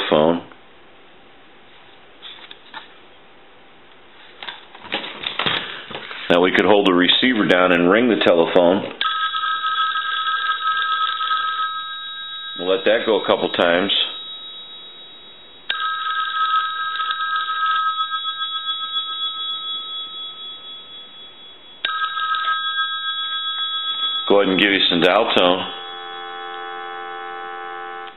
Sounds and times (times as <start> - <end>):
Speech: 0.0 - 0.5, 6.3 - 9.0, 12.6 - 14.2, 24.3 - 25.8
Inside, small room: 0.0 - 28.1
Telephone bell ringing: 9.0 - 28.1.